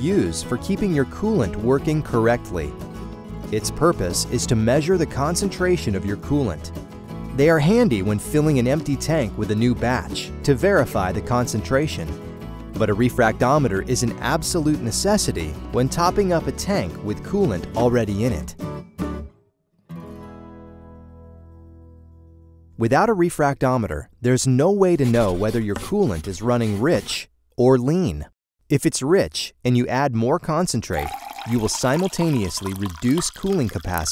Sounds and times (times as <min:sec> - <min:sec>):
Speech: 0:00.0 - 0:02.8, 0:03.5 - 0:06.7, 0:07.4 - 0:12.2, 0:12.8 - 0:18.6, 0:22.8 - 0:34.1
Music: 0:00.0 - 0:23.0.